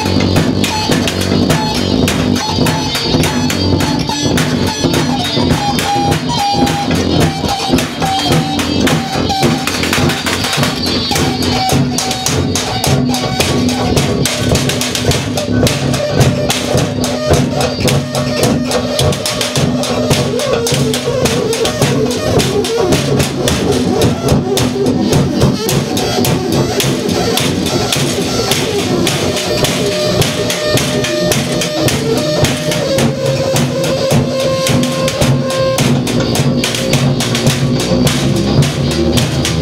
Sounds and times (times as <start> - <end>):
Musical instrument: 0.0 - 39.6.